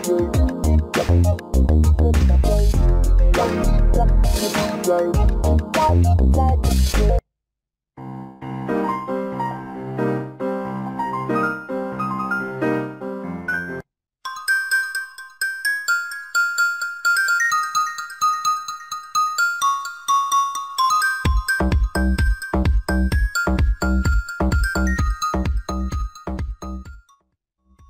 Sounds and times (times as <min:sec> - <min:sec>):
Music: 0:00.0 - 0:07.2, 0:08.0 - 0:27.9.